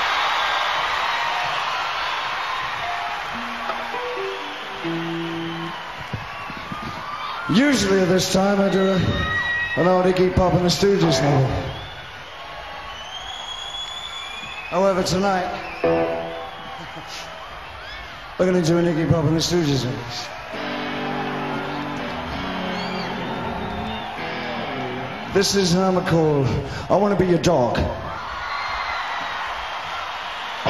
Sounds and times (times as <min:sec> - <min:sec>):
Music: 0:02.8 - 0:06.9, 0:15.8 - 0:16.6, 0:20.5 - 0:25.4
Speech: 0:07.5 - 0:09.2, 0:09.8 - 0:11.8, 0:14.7 - 0:15.6, 0:18.4 - 0:20.3, 0:25.4 - 0:28.1.